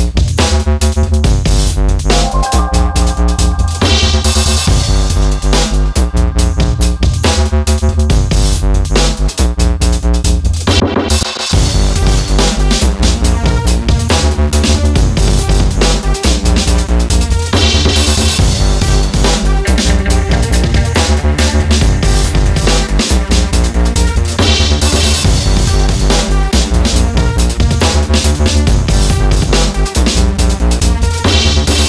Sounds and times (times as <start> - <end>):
Music: 0.0 - 31.8.